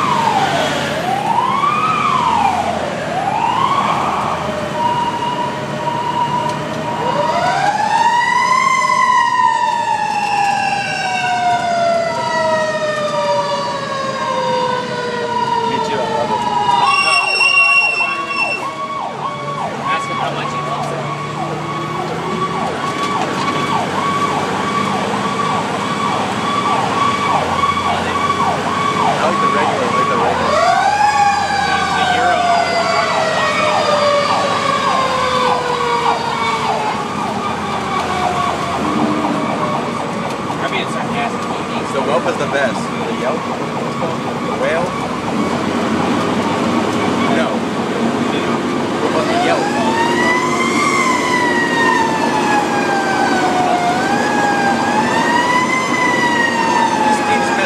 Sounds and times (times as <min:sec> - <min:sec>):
Fire engine, fire truck (siren): 0:00.0 - 0:57.6.